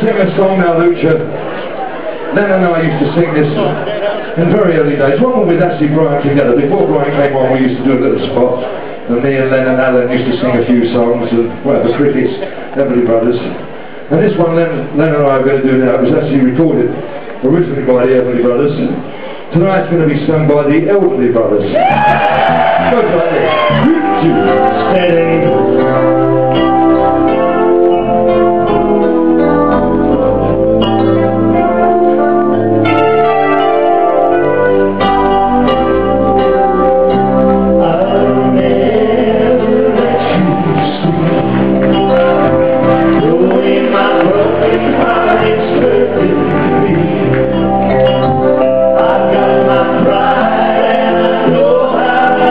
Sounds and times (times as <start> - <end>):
Speech: 0.0 - 1.4, 2.3 - 21.8, 22.8 - 25.6.